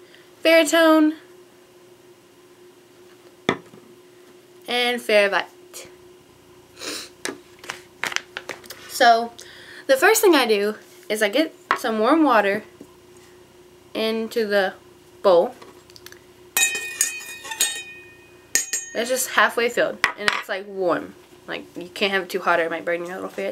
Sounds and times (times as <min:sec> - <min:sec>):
Speech: 0:04.7 - 0:05.9, 0:09.9 - 0:12.7, 0:19.0 - 0:23.5.